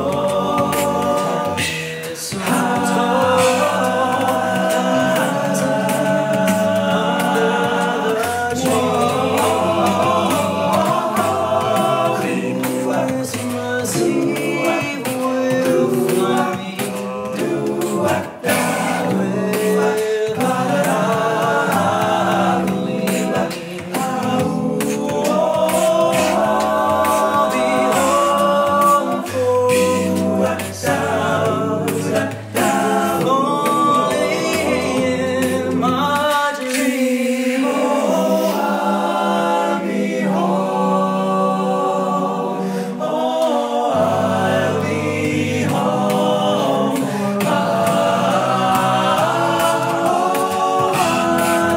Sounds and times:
Singing: 0.0s - 51.7s
Vocal music: 0.0s - 51.7s.

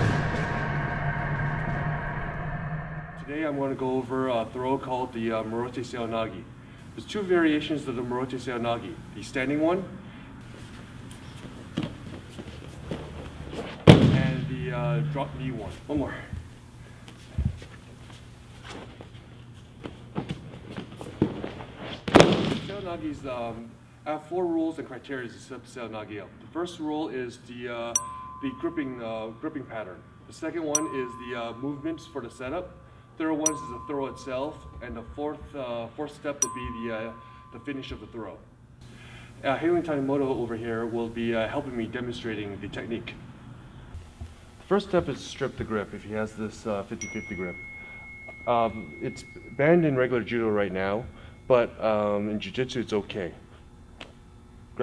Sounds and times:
Speech: 3.2s - 10.0s, 14.1s - 16.4s, 22.7s - 38.4s, 39.4s - 43.2s, 44.7s - 47.6s, 48.5s - 53.4s.

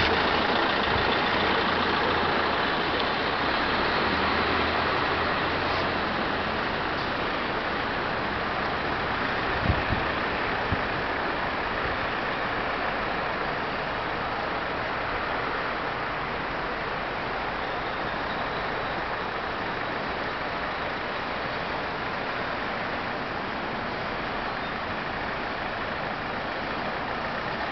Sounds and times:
Wind noise (microphone): 9.5s - 11.1s.

